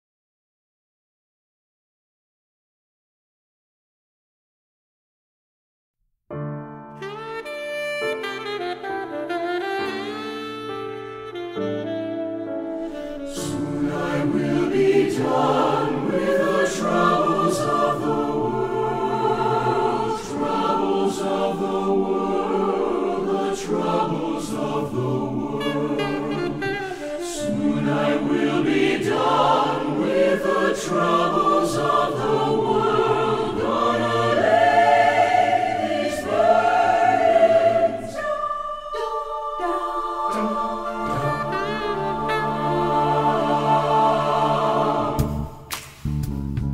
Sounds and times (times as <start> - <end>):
Saxophone: 6.8 - 45.6.